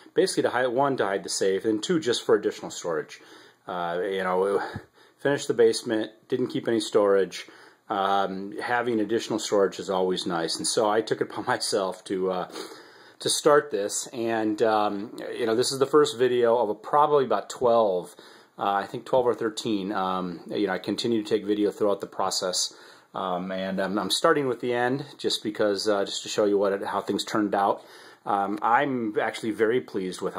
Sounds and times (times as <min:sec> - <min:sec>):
Speech: 0:00.0 - 0:12.6, 0:13.2 - 0:30.3.